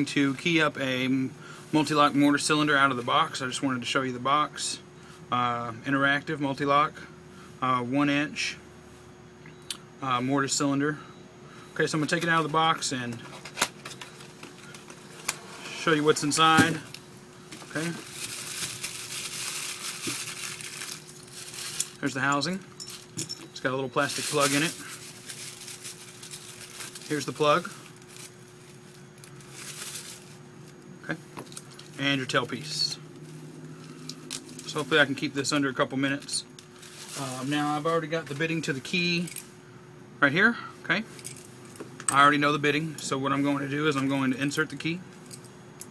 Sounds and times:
Speech: 0.0s - 8.6s, 10.0s - 11.0s, 11.8s - 13.2s, 15.8s - 16.9s, 17.7s - 18.0s, 22.0s - 22.6s, 23.6s - 24.8s, 27.1s - 27.8s, 32.0s - 33.0s, 34.7s - 36.5s, 37.2s - 39.3s, 40.2s - 41.1s, 42.1s - 45.0s.

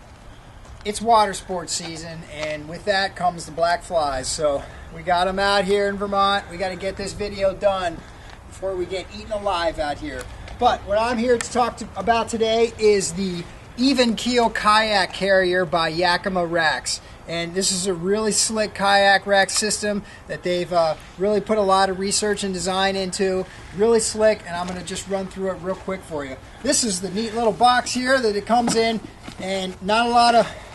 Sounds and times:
Speech: 0.9s - 30.6s.

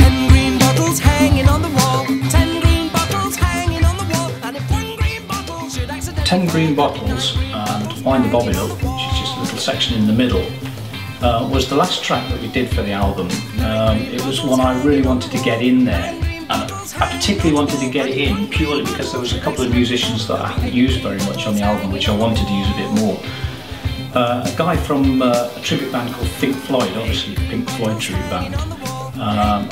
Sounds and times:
Music: 0.0s - 29.7s
Speech: 6.2s - 10.6s, 11.2s - 23.3s, 24.1s - 29.7s.

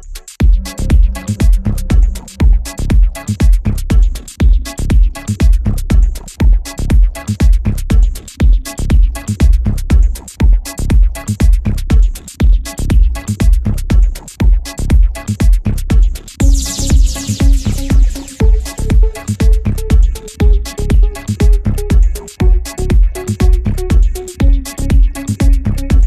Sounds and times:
Soundtrack music: 0.4s - 3.7s, 16.4s - 26.0s.

